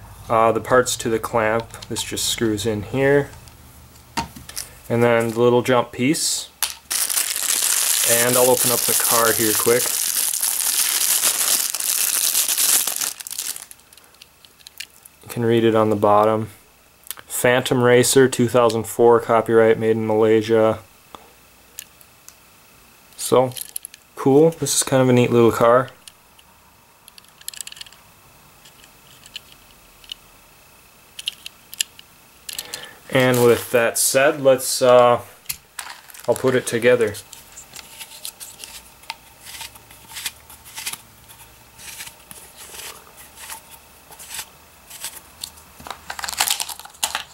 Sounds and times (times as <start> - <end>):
Inside, small room: 0.0 - 47.3
Speech: 0.3 - 3.4, 4.9 - 6.6, 8.0 - 9.9, 15.2 - 16.6, 17.3 - 20.9, 23.2 - 23.6, 24.2 - 26.0, 33.1 - 35.4, 36.3 - 37.3
Crumpling, crinkling: 6.6 - 15.1, 33.2 - 33.8, 35.8 - 36.8, 45.8 - 47.3.